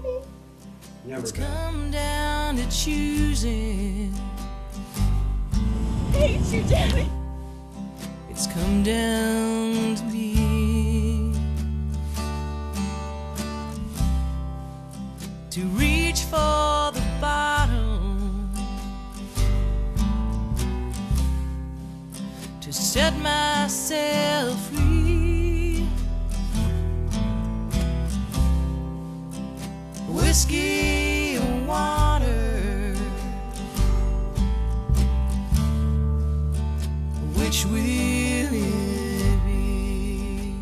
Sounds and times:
Speech: 0:00.0 - 0:00.3, 0:01.0 - 0:02.0, 0:06.1 - 0:07.2
Sad music: 0:04.8 - 0:08.0
Theme music: 0:05.6 - 0:07.2.

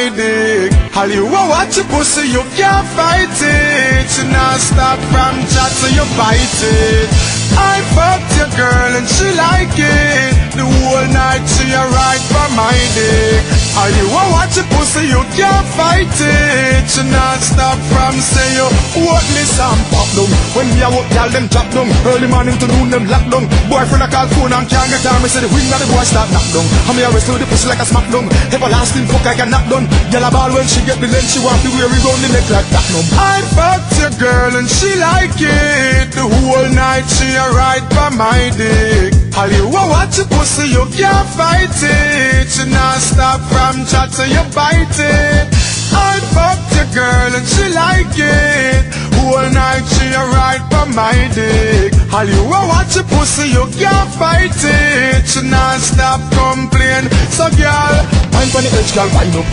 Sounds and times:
Music: 0:00.0 - 0:59.5.

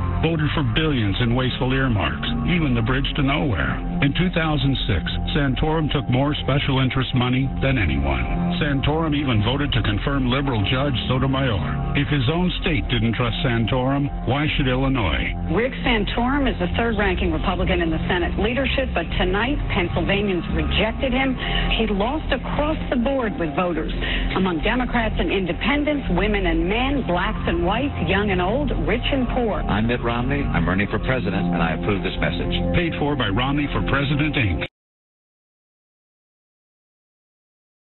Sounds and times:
Music: 0:00.0 - 0:34.7
Speech: 0:00.2 - 0:34.7.

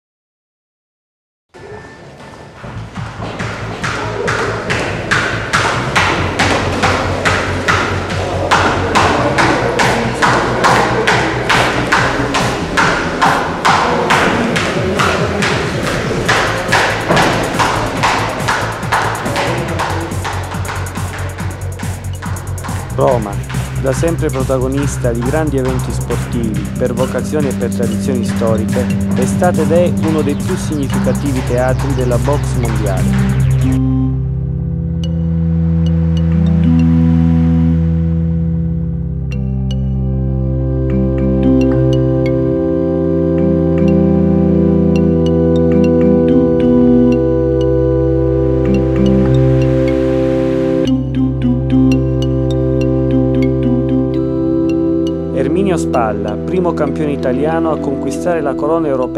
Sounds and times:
Music: 0:01.6 - 0:59.1.

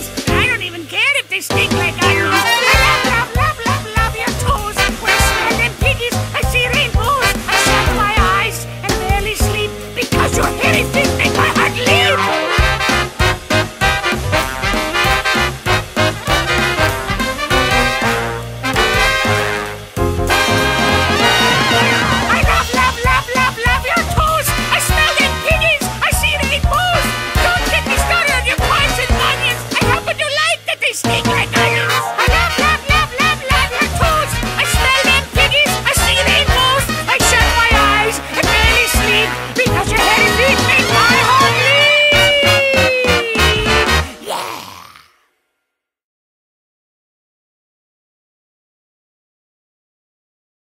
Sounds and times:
Music: 0:00.0 - 0:44.5.

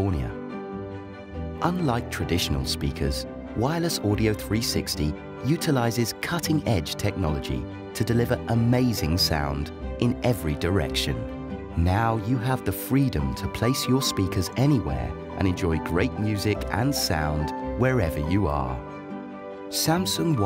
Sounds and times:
Speech: 0:00.0 - 0:00.4, 0:01.6 - 0:18.8, 0:19.7 - 0:20.4
Music: 0:00.0 - 0:20.4.

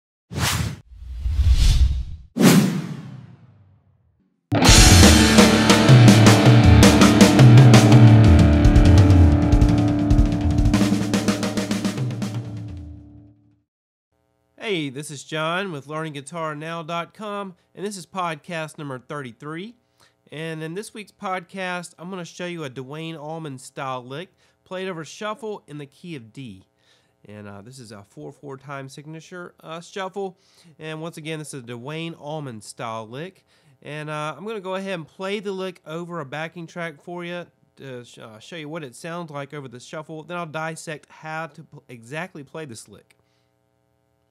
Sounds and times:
Speech: 0:14.6 - 0:43.1.

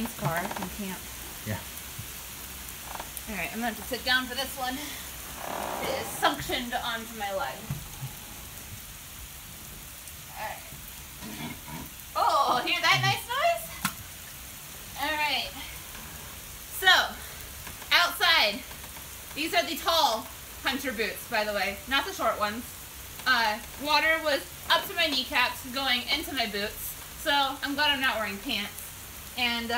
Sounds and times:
Rain on surface: 0:00.0 - 0:29.7
Speech: 0:05.8 - 0:07.7, 0:12.2 - 0:13.8, 0:15.0 - 0:15.6, 0:23.3 - 0:28.8, 0:29.4 - 0:29.7.

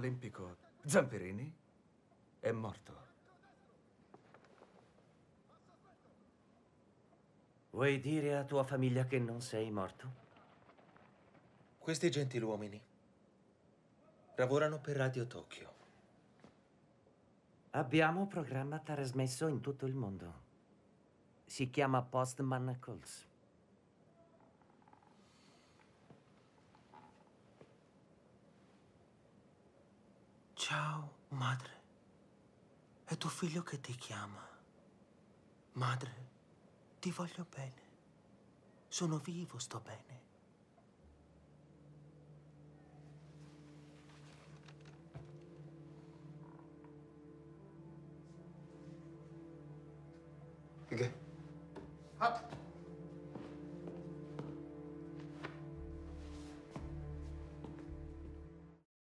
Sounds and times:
Speech: 0:00.0 - 0:01.6, 0:02.4 - 0:03.8, 0:05.5 - 0:06.2, 0:07.8 - 0:10.4, 0:11.8 - 0:12.9, 0:14.3 - 0:15.8, 0:17.8 - 0:20.5, 0:21.5 - 0:23.3, 0:30.6 - 0:31.8, 0:33.1 - 0:34.6, 0:35.8 - 0:36.3, 0:37.0 - 0:37.8, 0:38.9 - 0:40.2, 0:50.9 - 0:51.2, 0:52.2 - 0:52.6.

